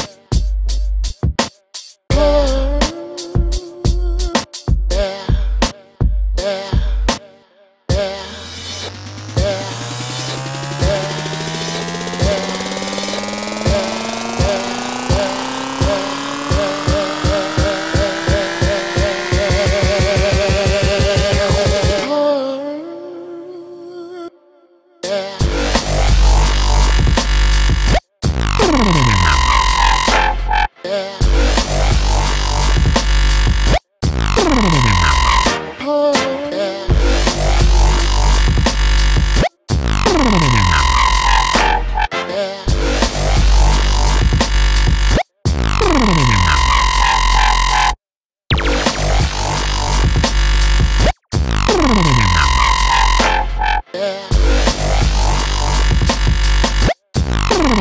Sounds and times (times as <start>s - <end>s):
Dubstep: 7.9s - 22.2s, 25.4s - 42.1s, 42.7s - 57.8s.